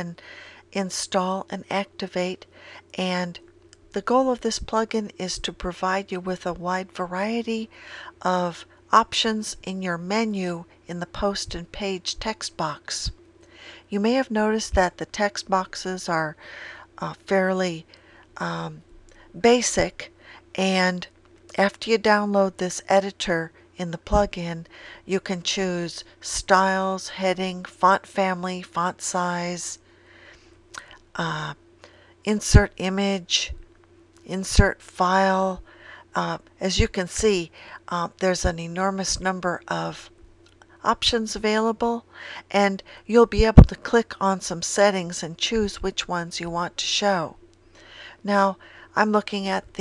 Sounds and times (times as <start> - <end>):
Speech: 0.0 - 0.2, 0.8 - 13.2, 13.9 - 16.4, 17.0 - 18.8, 19.4 - 29.8, 31.2 - 31.6, 32.3 - 33.6, 34.3 - 35.6, 36.2 - 40.1, 40.8 - 47.4, 48.2 - 49.8.